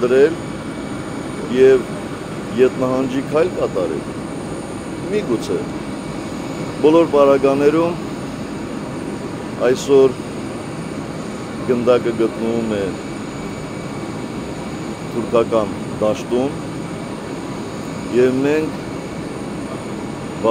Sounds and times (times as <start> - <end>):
Speech: 0.0 - 0.4, 1.5 - 1.9, 2.5 - 4.0, 5.1 - 5.7, 6.8 - 8.0, 9.6 - 10.2, 11.6 - 13.0, 15.1 - 16.6, 18.1 - 18.8.